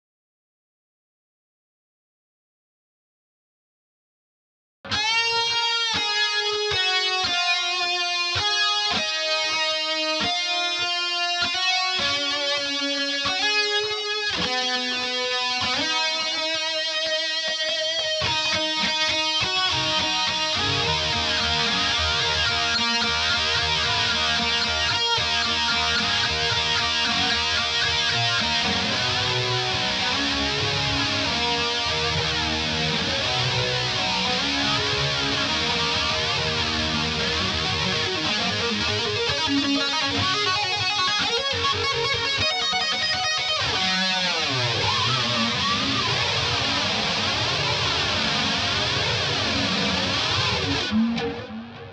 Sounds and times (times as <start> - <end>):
Music: 4.9 - 51.9.